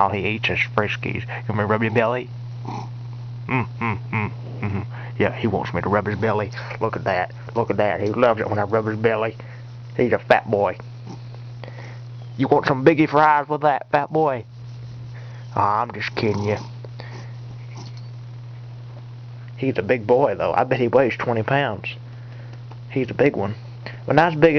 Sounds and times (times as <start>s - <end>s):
Speech: 0.0s - 2.3s, 3.6s - 9.4s, 10.0s - 10.8s, 12.4s - 14.5s, 15.5s - 16.7s, 19.6s - 22.0s, 22.9s - 24.5s.